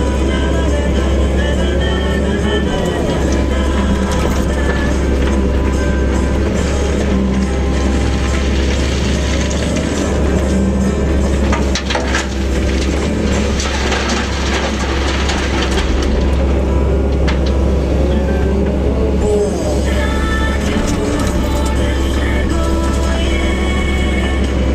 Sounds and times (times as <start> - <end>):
Music: 0.0 - 24.7.